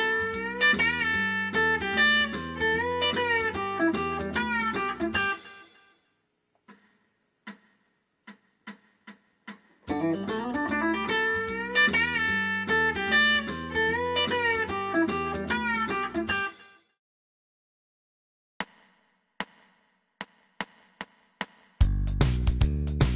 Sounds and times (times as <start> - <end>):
Music: 0.0 - 17.0, 19.4 - 23.1.